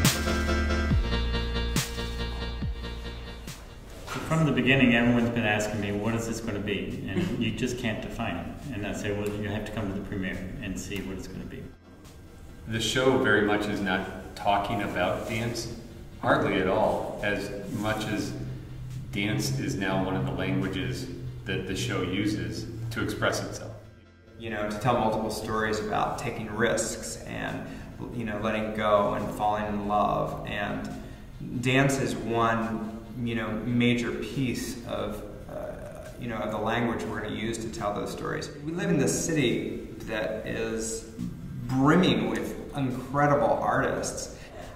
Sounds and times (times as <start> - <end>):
Music: 0.0 - 44.7
Speech: 4.2 - 11.8, 12.7 - 18.5, 19.1 - 23.8, 24.4 - 44.7.